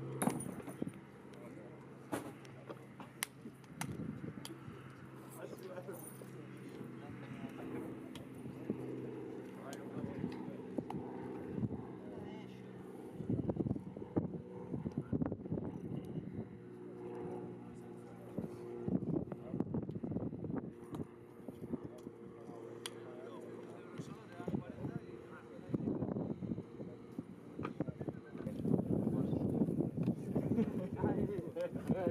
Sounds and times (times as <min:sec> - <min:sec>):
Speech: 0:01.3 - 0:01.8, 0:05.3 - 0:10.7, 0:11.9 - 0:12.7, 0:21.7 - 0:26.1, 0:27.7 - 0:29.6, 0:30.5 - 0:32.1.